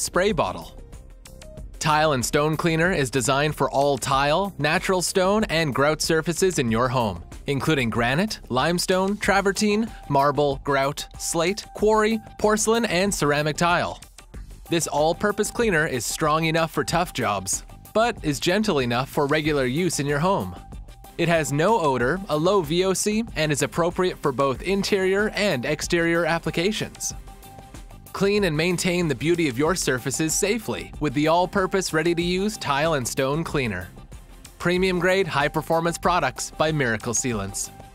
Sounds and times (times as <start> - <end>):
Speech: 0.0 - 0.7, 1.8 - 14.0, 14.7 - 20.6, 21.2 - 27.1, 28.2 - 33.9, 34.6 - 37.7
Music: 0.0 - 37.9.